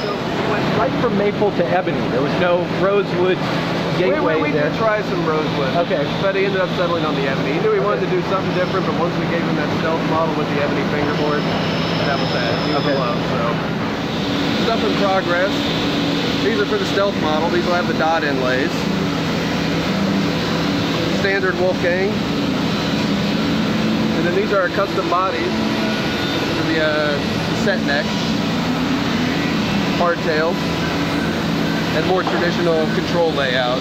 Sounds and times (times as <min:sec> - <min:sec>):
Inside, large room or hall: 0:00.0 - 0:33.8.